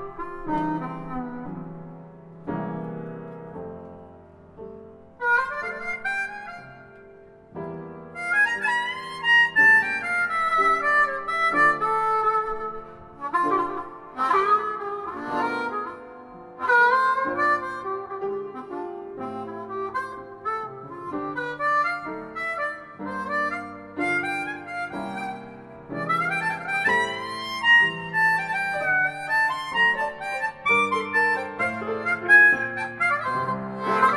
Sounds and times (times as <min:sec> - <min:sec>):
Harmonica: 0:00.0 - 0:02.0, 0:05.2 - 0:34.1
Wind instrument, woodwind instrument: 0:00.0 - 0:34.1.